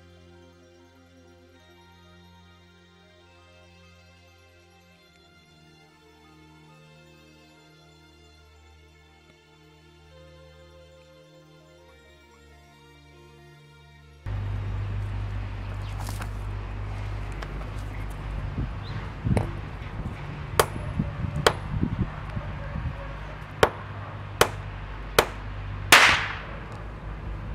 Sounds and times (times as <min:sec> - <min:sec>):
Music: 0:00.0 - 0:26.4.